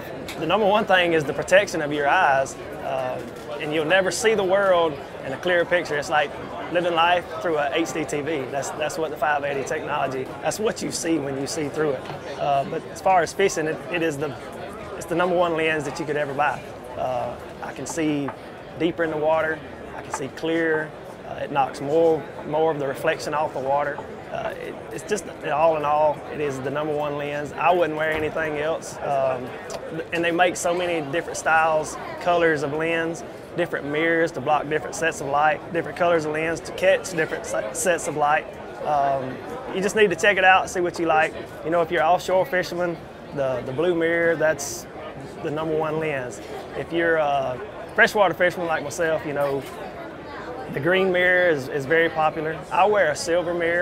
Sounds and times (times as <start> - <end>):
Speech: 0.0 - 53.8.